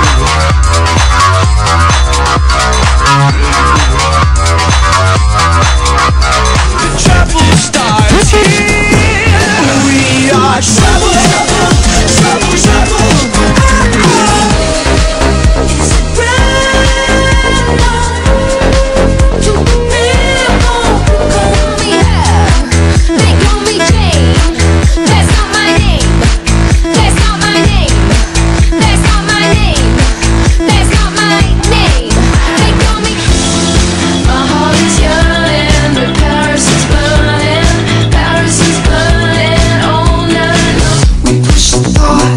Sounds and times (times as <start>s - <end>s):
Music: 0.0s - 42.3s.